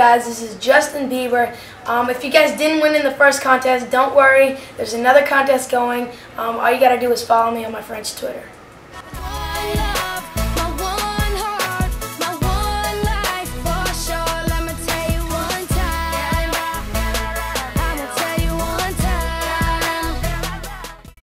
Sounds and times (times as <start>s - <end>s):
Music: 9.1s - 21.2s.